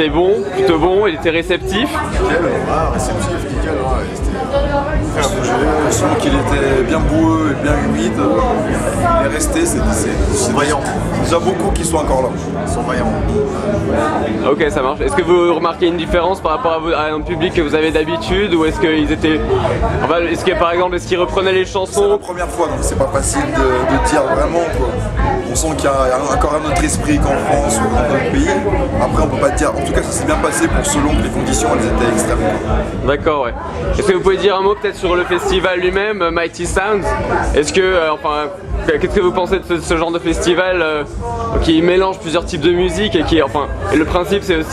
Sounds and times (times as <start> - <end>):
Crowd: 0.0 - 44.7
Music: 0.0 - 44.7.